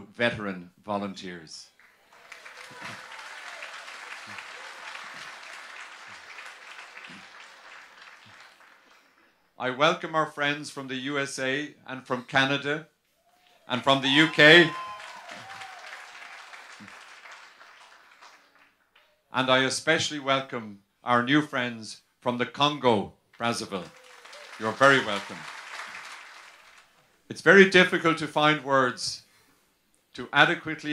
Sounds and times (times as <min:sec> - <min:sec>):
Male speech, man speaking: 0:00.0 - 0:01.7, 0:09.6 - 0:12.9, 0:13.7 - 0:14.8, 0:19.4 - 0:23.9, 0:24.6 - 0:25.4, 0:27.3 - 0:29.2, 0:30.2 - 0:30.9
Narration, monologue: 0:00.0 - 0:01.8, 0:09.5 - 0:13.1, 0:13.7 - 0:14.8, 0:19.3 - 0:23.9, 0:27.0 - 0:30.9.